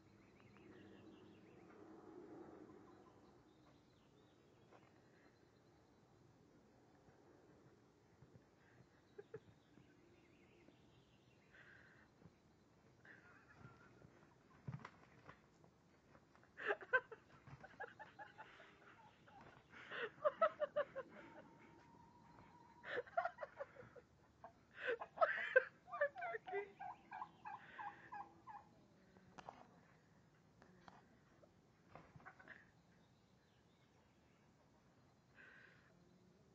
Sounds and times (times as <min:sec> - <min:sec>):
Gobble: 0:26.7 - 0:28.7.